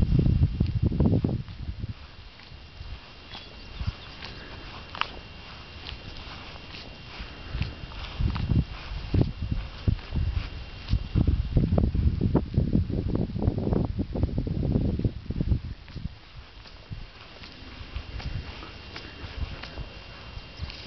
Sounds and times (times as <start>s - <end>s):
Walk, footsteps: 1.4s - 11.3s, 15.8s - 20.8s.